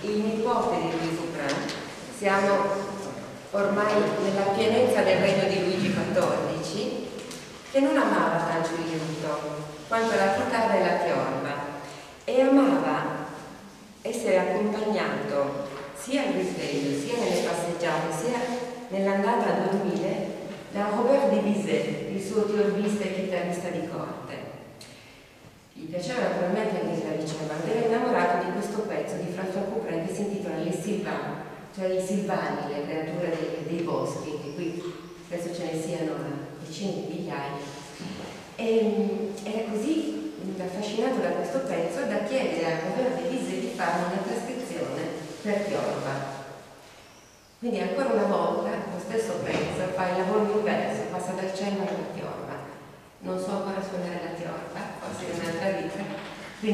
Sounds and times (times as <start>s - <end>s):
Speech: 0.0s - 24.5s, 25.8s - 46.4s, 47.6s - 56.7s.